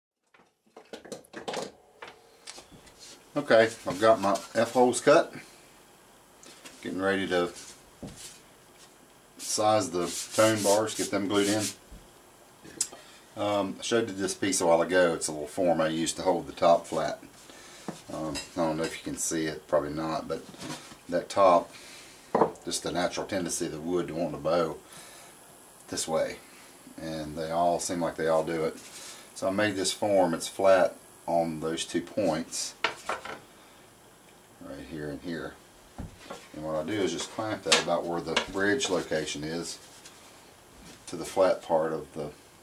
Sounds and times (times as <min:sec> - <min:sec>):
Speech: 0:03.3 - 0:05.5, 0:06.8 - 0:07.6, 0:09.4 - 0:11.8, 0:13.4 - 0:17.3, 0:18.1 - 0:20.5, 0:21.1 - 0:21.7, 0:22.6 - 0:24.8, 0:25.9 - 0:26.4, 0:27.0 - 0:28.8, 0:29.4 - 0:32.8, 0:34.6 - 0:35.6, 0:36.5 - 0:39.8, 0:41.1 - 0:42.4.